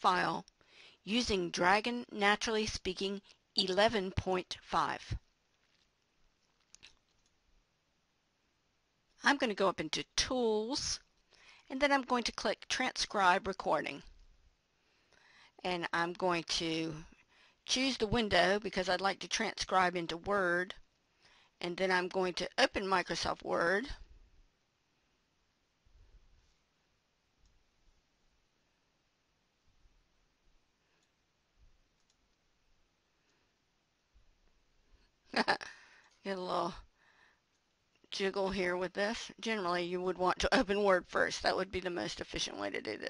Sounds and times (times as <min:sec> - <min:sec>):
Female speech, woman speaking: 0:00.0 - 0:00.5, 0:01.1 - 0:05.2, 0:09.2 - 0:11.0, 0:11.7 - 0:14.0, 0:15.6 - 0:17.1, 0:17.7 - 0:20.8, 0:21.6 - 0:24.0, 0:36.3 - 0:36.8, 0:38.2 - 0:43.1.